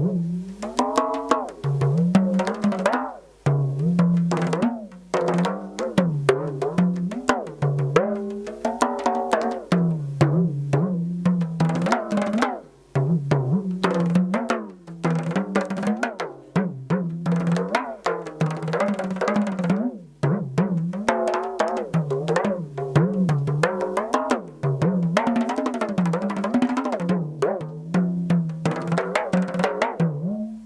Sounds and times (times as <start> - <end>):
Drum: 0.0 - 30.6.